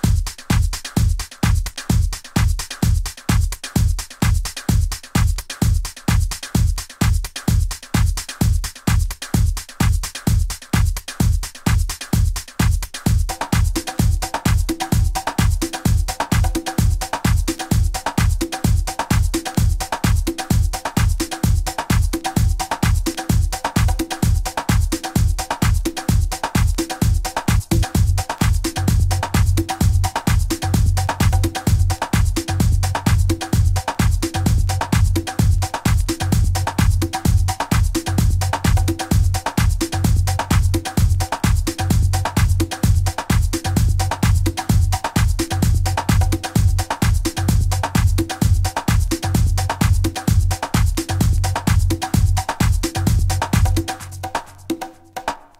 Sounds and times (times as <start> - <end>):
Disco: 0.0 - 55.6.